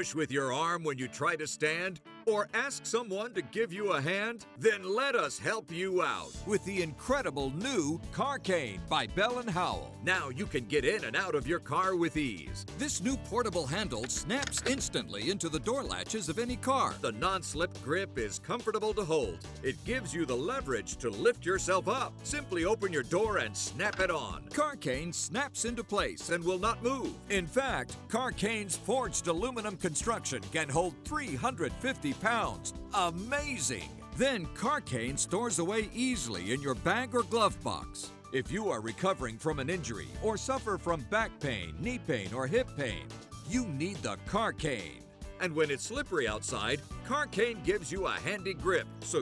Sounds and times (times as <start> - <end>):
Music: 0.0 - 49.2
Speech: 0.0 - 49.2.